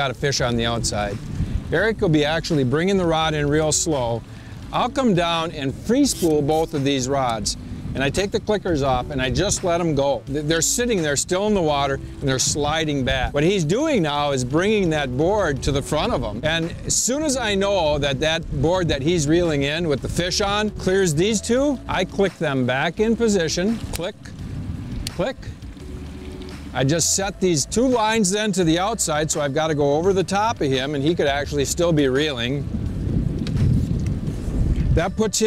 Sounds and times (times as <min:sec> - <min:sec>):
Speech: 0:00.0 - 0:24.2, 0:26.8 - 0:32.6, 0:35.0 - 0:35.4.